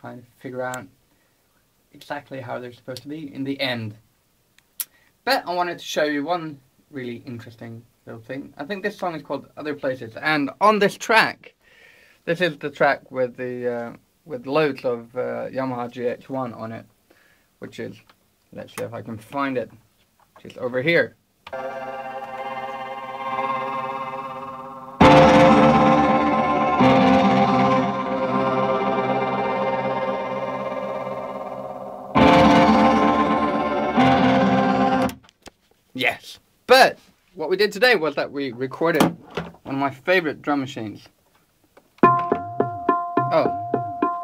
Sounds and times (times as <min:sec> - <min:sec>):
Speech: 0:00.0 - 0:00.9, 0:01.9 - 0:04.0, 0:05.3 - 0:11.6, 0:12.3 - 0:16.9, 0:17.6 - 0:19.8, 0:20.4 - 0:21.2, 0:36.0 - 0:39.1, 0:39.7 - 0:41.2, 0:43.3 - 0:43.6
Music: 0:21.6 - 0:35.2, 0:42.0 - 0:44.2.